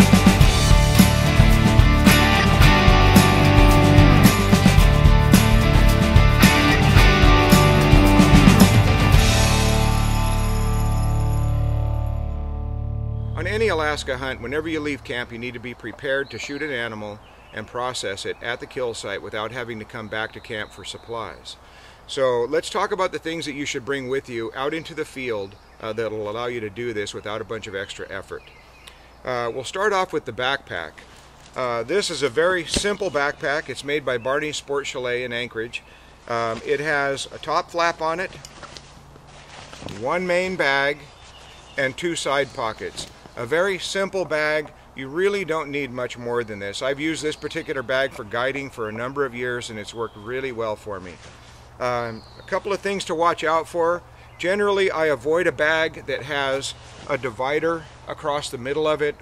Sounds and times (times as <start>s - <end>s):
Music: 0.0s - 14.0s
Speech: 13.4s - 28.4s, 29.2s - 31.0s, 31.6s - 38.4s, 39.9s - 41.1s, 41.8s - 51.2s, 51.8s - 59.2s.